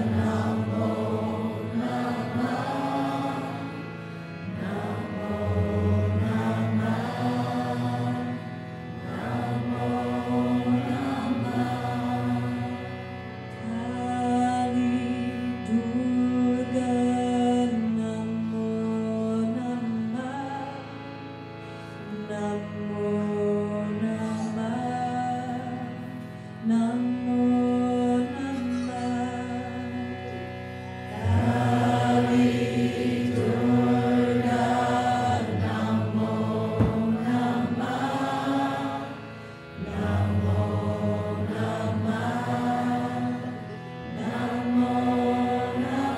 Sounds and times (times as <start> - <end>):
Mantra: 0.0 - 3.8, 4.5 - 8.5, 9.1 - 12.9, 13.6 - 20.8, 22.1 - 30.1, 31.1 - 39.2, 39.8 - 46.1.